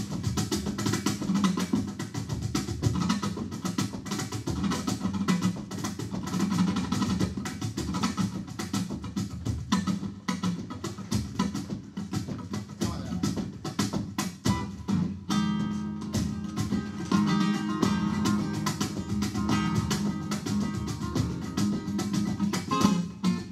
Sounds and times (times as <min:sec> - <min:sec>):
Acoustic guitar: 0:00.0 - 0:23.5
Flamenco: 0:00.0 - 0:23.5
Strum: 0:00.0 - 0:23.5
Electric guitar: 0:13.3 - 0:23.5.